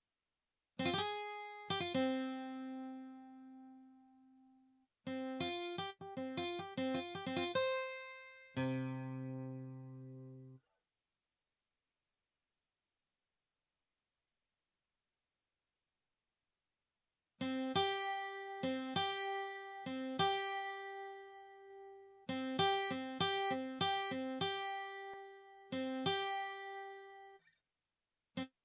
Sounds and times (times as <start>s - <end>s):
Music: 0.8s - 10.6s, 17.4s - 27.4s.